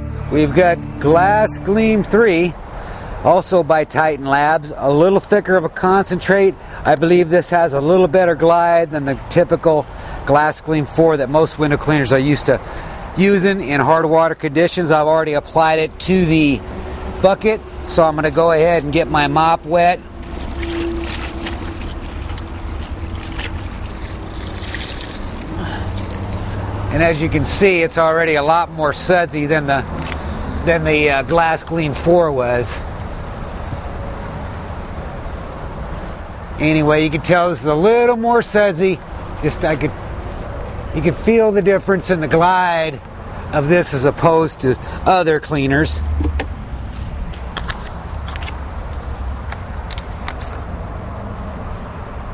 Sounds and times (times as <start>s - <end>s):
Speech: 0.3s - 2.6s, 3.3s - 12.6s, 13.2s - 16.6s, 17.2s - 20.0s, 26.9s - 29.9s, 30.6s - 32.8s, 36.6s - 40.0s, 40.9s - 46.0s.